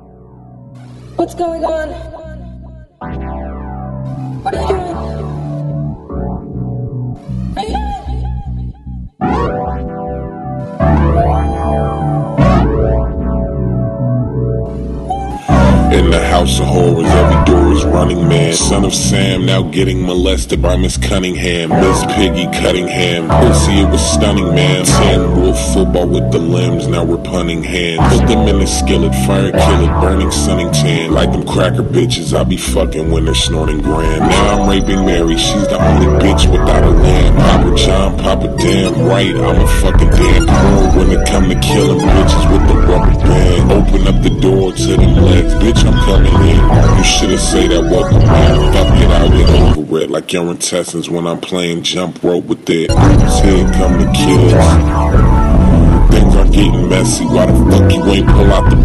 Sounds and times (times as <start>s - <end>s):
Synthesizer: 0.0s - 50.0s, 52.9s - 58.8s.